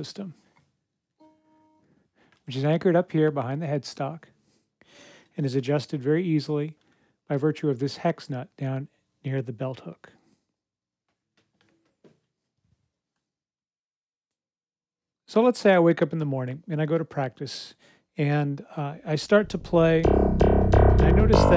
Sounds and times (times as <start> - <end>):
Speech: 0.0 - 0.4, 2.5 - 4.3, 5.4 - 10.2, 15.3 - 20.1, 21.0 - 21.5.